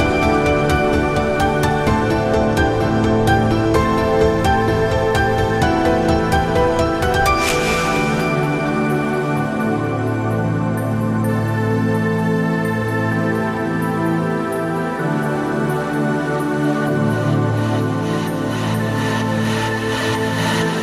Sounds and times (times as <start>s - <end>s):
New-age music: 0.0s - 20.8s.